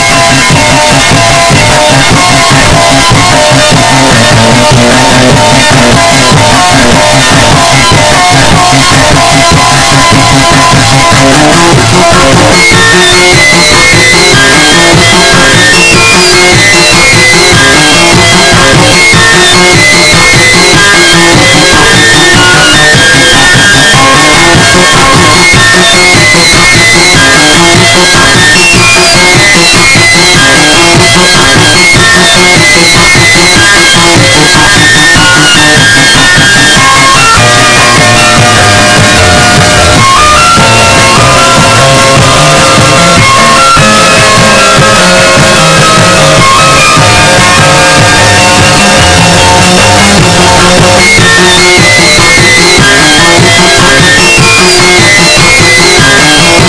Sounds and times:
Music: 0:00.0 - 0:56.6.

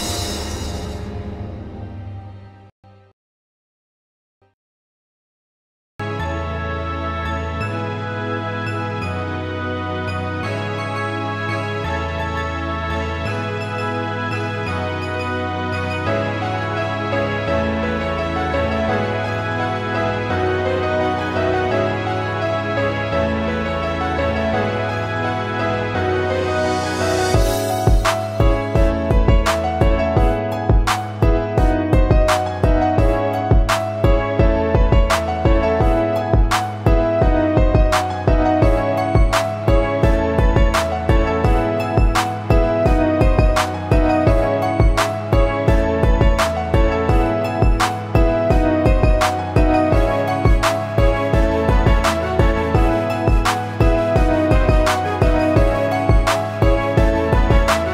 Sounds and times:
Music: 0:00.0 - 0:03.2, 0:06.0 - 0:57.9.

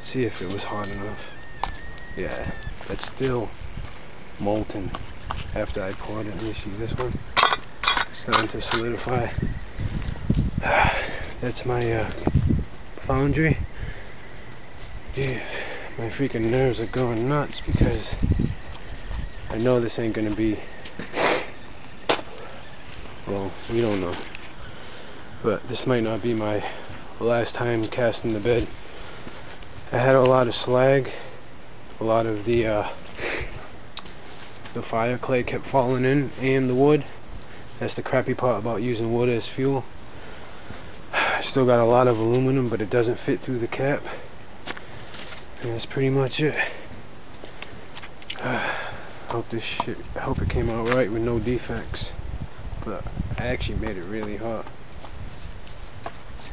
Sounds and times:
Speech: 0:00.0 - 0:01.3, 0:02.2 - 0:03.5, 0:04.4 - 0:07.2, 0:08.1 - 0:09.4, 0:11.4 - 0:12.3, 0:13.0 - 0:13.6, 0:15.2 - 0:18.2, 0:19.5 - 0:20.7, 0:23.3 - 0:24.3, 0:25.4 - 0:28.7, 0:29.9 - 0:31.2, 0:32.0 - 0:33.0, 0:34.7 - 0:37.2, 0:37.8 - 0:39.9, 0:41.4 - 0:44.2, 0:45.6 - 0:46.8, 0:49.3 - 0:52.2, 0:52.8 - 0:54.7
Outside, rural or natural: 0:00.0 - 0:56.5.

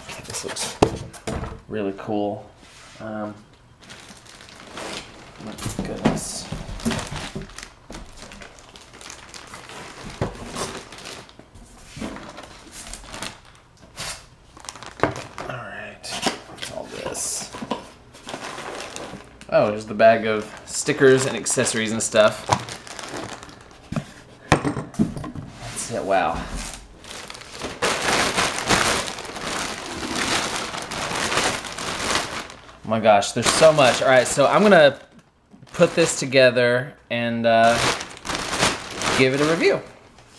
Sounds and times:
Crackle: 0:06.8 - 0:11.5, 0:12.4 - 0:15.5, 0:27.0 - 0:32.7.

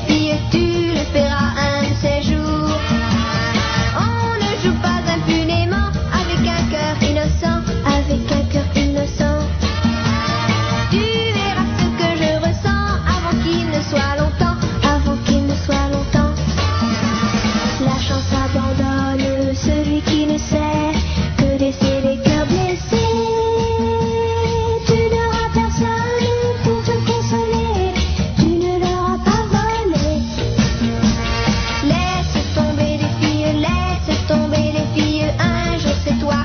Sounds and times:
Guitar: 0:00.0 - 0:36.4.

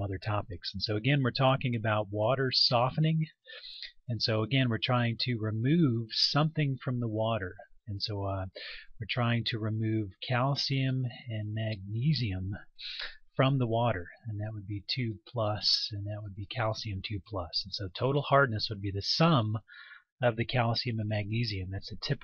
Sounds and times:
Speech: 0:00.0 - 0:22.2.

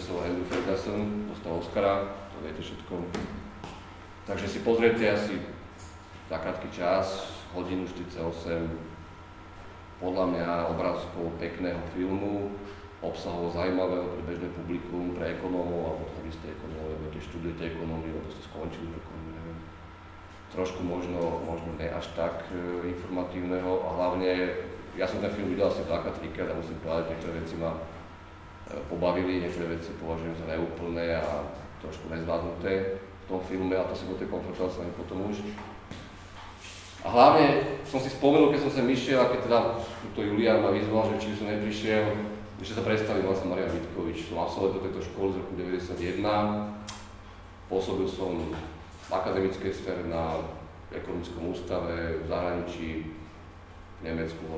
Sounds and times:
Speech: 0:00.0 - 0:03.4, 0:04.3 - 0:05.7, 0:06.3 - 0:09.0, 0:10.0 - 0:19.8, 0:20.5 - 0:28.0, 0:28.7 - 0:35.7, 0:37.0 - 0:47.0, 0:47.7 - 0:53.3, 0:54.0 - 0:54.5.

